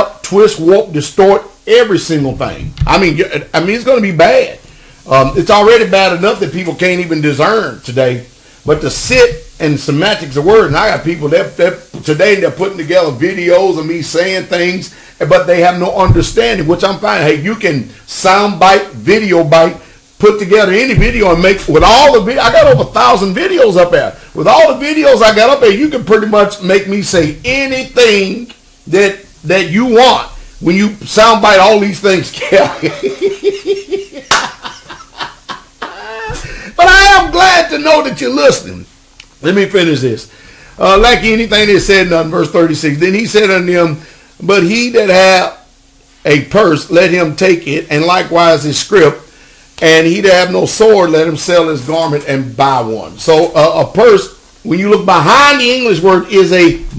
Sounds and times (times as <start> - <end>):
Speech: 0.0 - 33.7, 35.9 - 56.9
Inside, small room: 0.0 - 56.9.